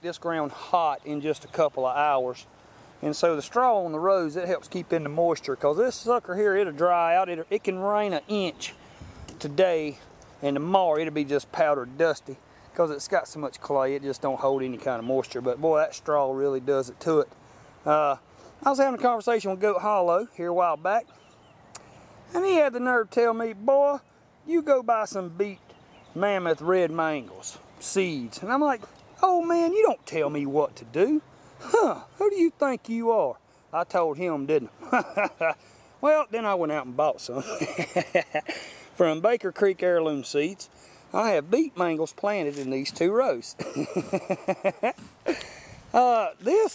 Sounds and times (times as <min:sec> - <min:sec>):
Speech: 0:00.0 - 0:08.8, 0:09.4 - 0:21.1, 0:22.3 - 0:25.6, 0:26.2 - 0:37.7, 0:39.0 - 0:43.6, 0:45.9 - 0:46.7.